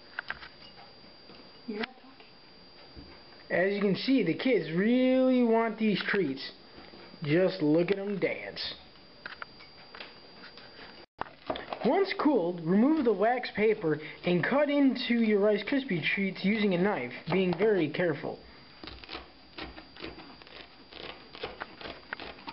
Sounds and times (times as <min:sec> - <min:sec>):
Speech: 0:03.5 - 0:06.6, 0:07.2 - 0:08.8, 0:11.8 - 0:18.4.